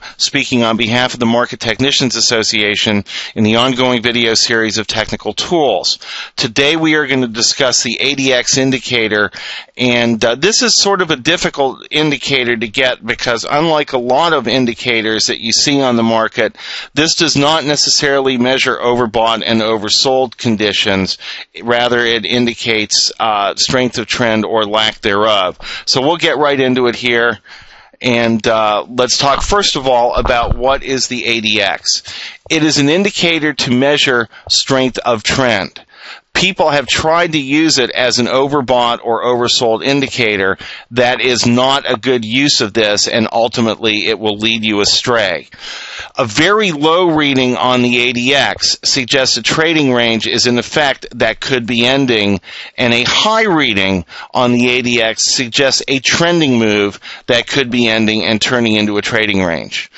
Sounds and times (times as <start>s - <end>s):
Speech: 0.0s - 27.4s, 28.0s - 45.5s, 46.1s - 59.9s.